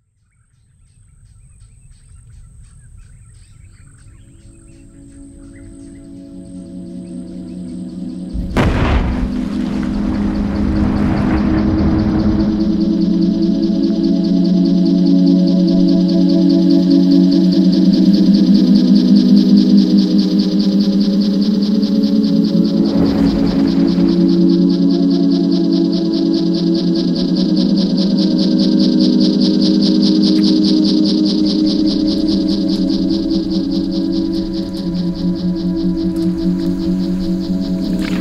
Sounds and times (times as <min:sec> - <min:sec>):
Outside, rural or natural: 0:00.0 - 0:38.2
Outside, urban or manmade: 0:00.0 - 0:38.2
Music: 0:03.4 - 0:38.2.